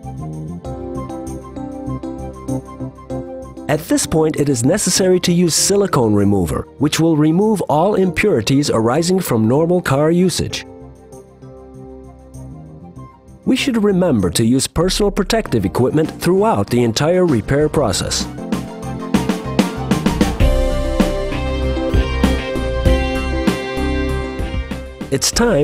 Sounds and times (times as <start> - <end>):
Music: 0.0 - 25.6
Speech: 3.7 - 10.6, 13.5 - 18.3, 25.1 - 25.6.